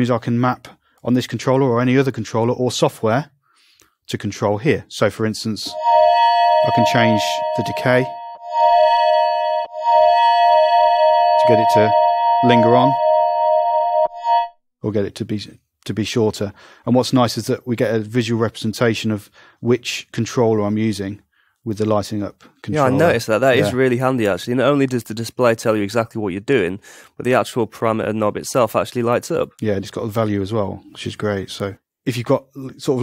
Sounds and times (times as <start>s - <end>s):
Speech: 0.0s - 3.3s, 4.1s - 5.8s, 6.7s - 8.1s, 11.5s - 13.0s, 14.8s - 33.0s
Synthesizer: 5.7s - 14.5s.